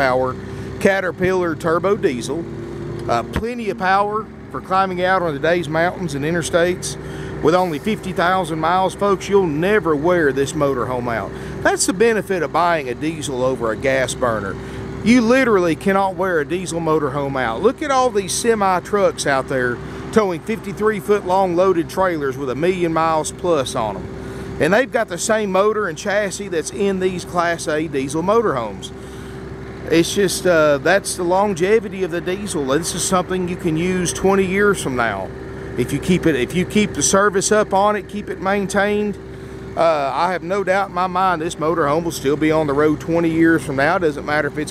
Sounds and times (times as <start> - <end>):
Speech: 0.0 - 2.5, 3.1 - 29.0, 29.8 - 39.2, 39.8 - 44.7.